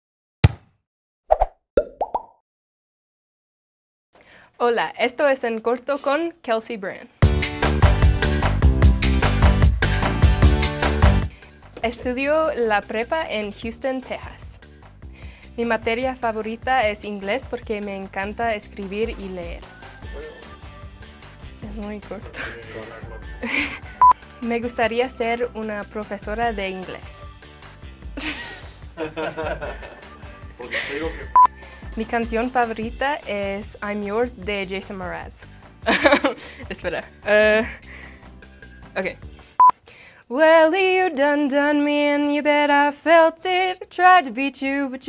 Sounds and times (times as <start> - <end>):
Plop: 1.3 - 2.4
Female speech, woman speaking: 4.6 - 7.1, 11.8 - 14.6, 15.6 - 19.6, 21.6 - 22.4, 24.4 - 27.2, 32.0 - 35.4, 36.7 - 37.7, 39.0 - 39.2, 44.2 - 45.0
Music: 7.2 - 39.7.